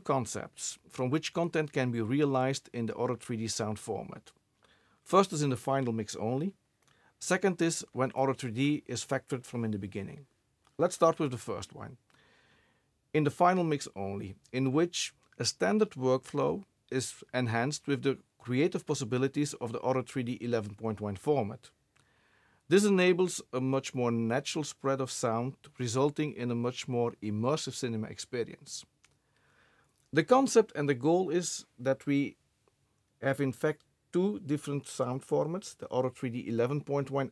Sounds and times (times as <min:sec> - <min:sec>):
Speech: 0:00.0 - 0:04.4, 0:05.1 - 0:06.6, 0:07.2 - 0:12.0, 0:13.2 - 0:21.8, 0:22.7 - 0:28.9, 0:30.1 - 0:32.4, 0:33.2 - 0:37.3.